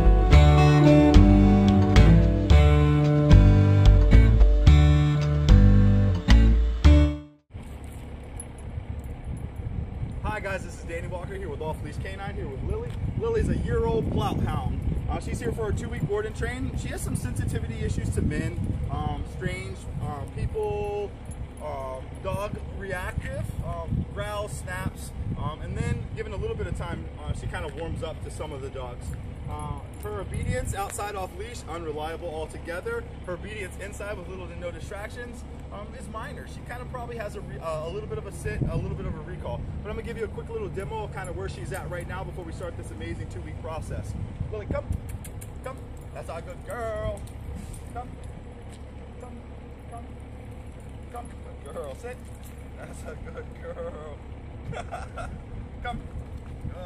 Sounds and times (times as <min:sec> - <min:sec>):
Speech: 0:10.2 - 0:45.0, 0:45.6 - 0:47.3, 0:47.9 - 0:48.2, 0:51.1 - 0:54.2, 0:55.8 - 0:56.1.